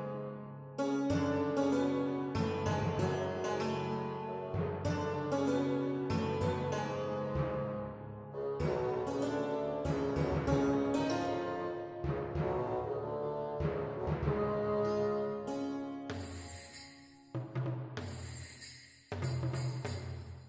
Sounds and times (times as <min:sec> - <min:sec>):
Keyboard (musical): 0:00.0 - 0:17.4.